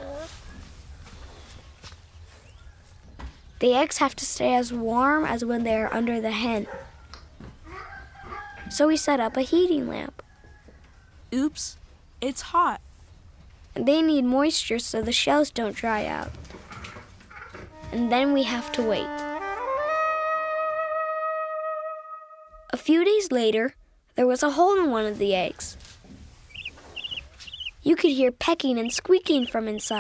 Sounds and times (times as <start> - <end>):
Speech: 3.6 - 6.7, 8.7 - 10.2, 11.4 - 12.8, 13.8 - 16.3, 17.9 - 19.2, 22.7 - 25.8, 27.8 - 30.0
Music: 17.7 - 22.7.